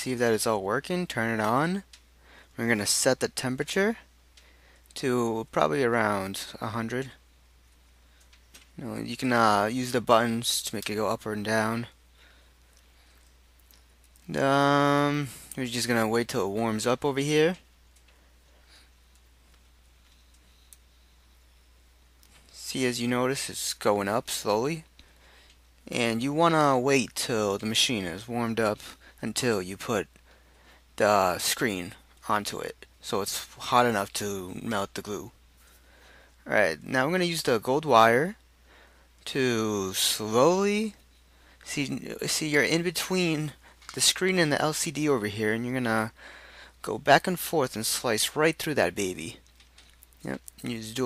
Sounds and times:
Speech: 0:00.0 - 0:01.9, 0:02.6 - 0:04.1, 0:05.0 - 0:07.2, 0:08.8 - 0:12.0, 0:14.2 - 0:17.6, 0:22.6 - 0:24.9, 0:25.9 - 0:30.1, 0:31.0 - 0:35.4, 0:36.4 - 0:38.4, 0:39.2 - 0:41.0, 0:41.6 - 0:46.2, 0:46.8 - 0:49.4, 0:50.2 - 0:51.0.

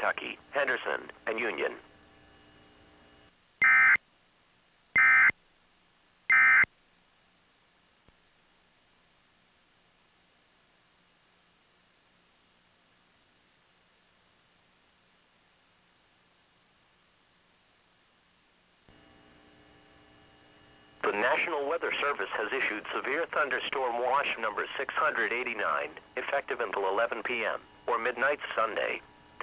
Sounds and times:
Speech: 0:00.0 - 0:01.8, 0:21.0 - 0:29.4.

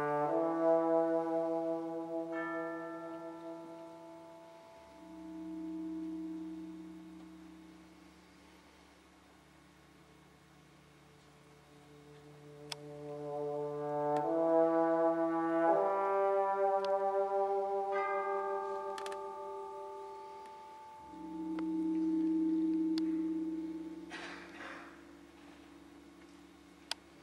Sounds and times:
Trumpet: 0:00.0 - 0:05.2, 0:11.7 - 0:21.4
Orchestra: 0:00.0 - 0:07.2, 0:11.0 - 0:26.4
Classical music: 0:00.0 - 0:07.6, 0:11.2 - 0:24.8.

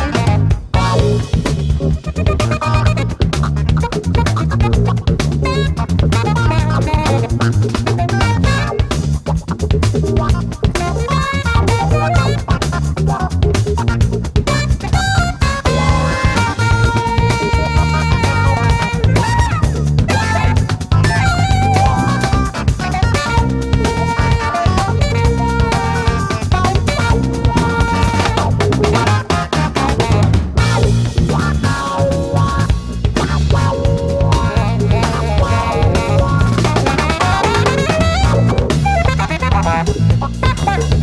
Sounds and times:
Music: 0:00.0 - 0:41.0.

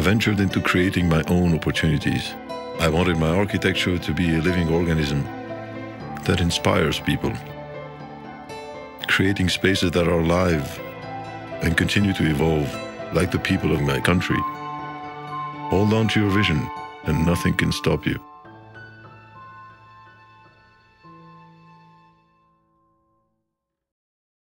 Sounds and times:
Speech: 0:00.0 - 0:05.3, 0:06.2 - 0:07.5, 0:09.0 - 0:10.8, 0:11.6 - 0:14.5, 0:15.7 - 0:18.2
Music: 0:00.0 - 0:23.9.

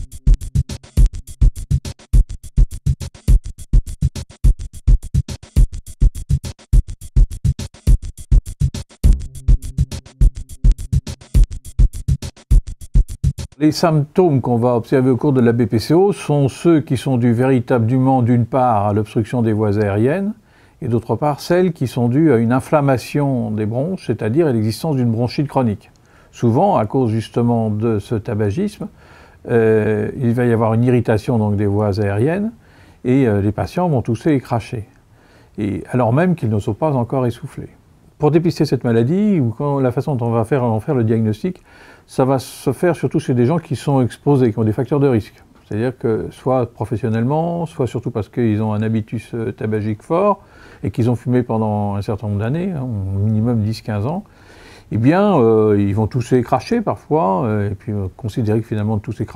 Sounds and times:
Speech: 0:13.6 - 0:35.0, 0:35.6 - 0:54.3, 0:54.9 - 0:59.3.

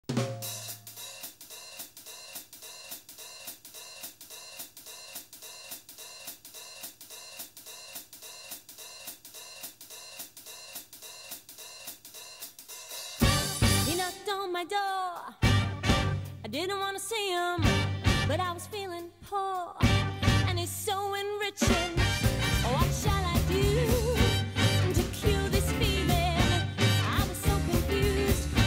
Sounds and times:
Hi-hat: 0:00.4 - 0:14.3.

